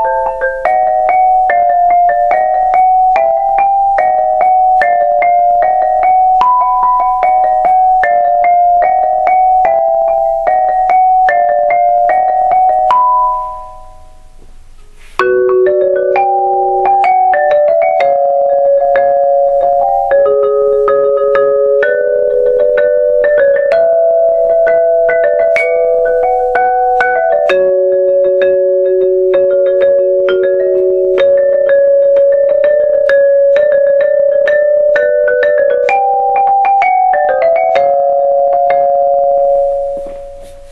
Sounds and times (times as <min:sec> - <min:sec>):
Glockenspiel: 0:00.0 - 0:14.4, 0:15.2 - 0:40.7
Marimba, xylophone: 0:00.0 - 0:14.5, 0:15.1 - 0:40.7.